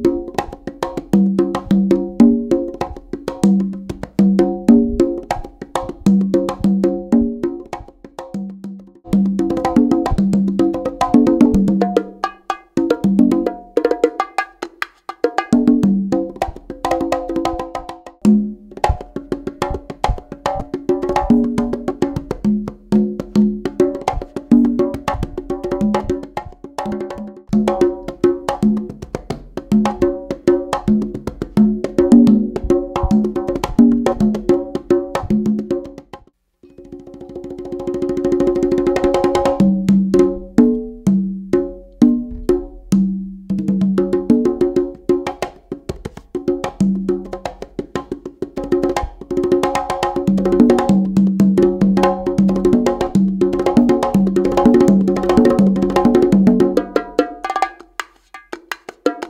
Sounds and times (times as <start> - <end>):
Wood block: 0.0 - 59.2.